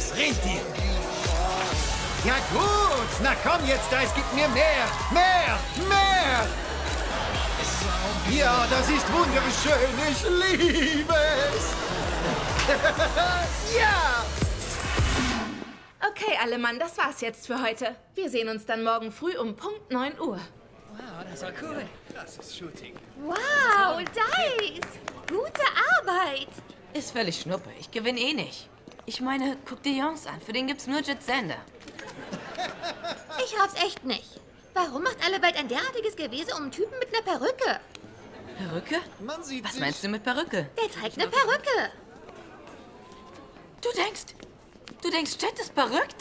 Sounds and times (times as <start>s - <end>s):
Music: 0.0s - 15.7s.